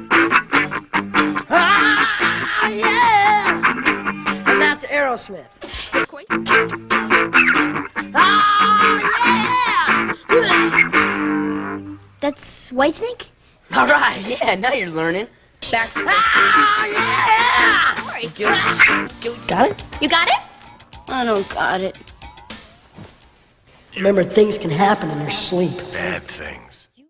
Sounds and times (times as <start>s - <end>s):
Guitar: 0.0s - 26.4s
Speech: 24.0s - 26.9s.